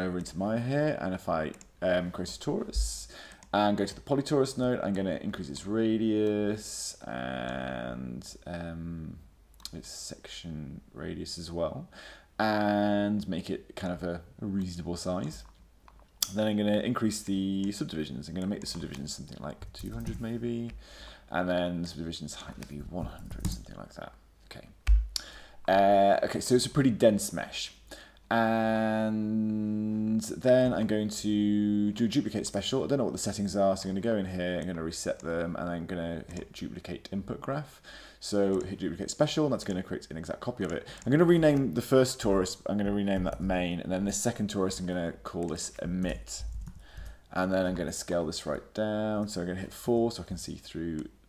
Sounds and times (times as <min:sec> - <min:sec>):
Speech: 0:00.0 - 0:15.6, 0:16.2 - 0:24.8, 0:25.7 - 0:46.6, 0:47.3 - 0:51.2.